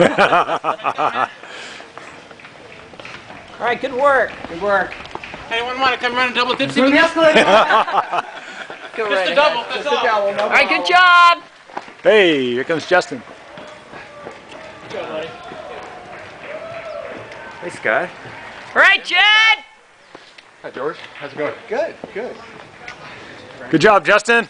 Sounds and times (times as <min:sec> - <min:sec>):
Outside, urban or manmade: 0:00.0 - 0:24.4
Run: 0:00.0 - 0:24.4.